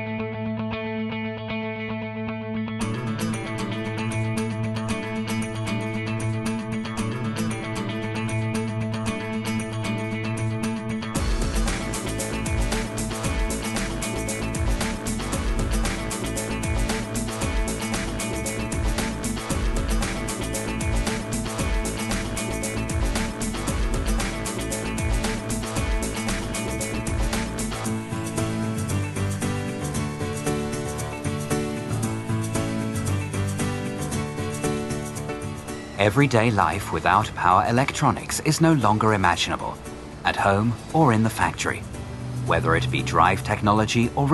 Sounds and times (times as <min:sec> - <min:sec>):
Electronica: 0:02.8 - 0:44.3.